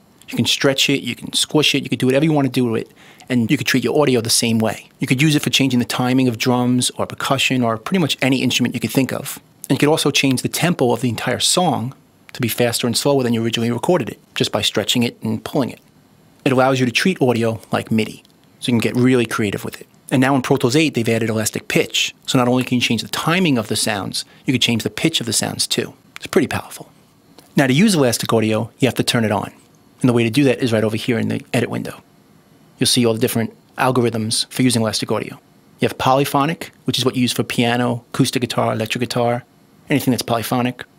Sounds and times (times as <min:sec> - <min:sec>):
Speech: 0:00.2 - 0:26.9, 0:27.5 - 0:32.1, 0:32.8 - 0:40.9.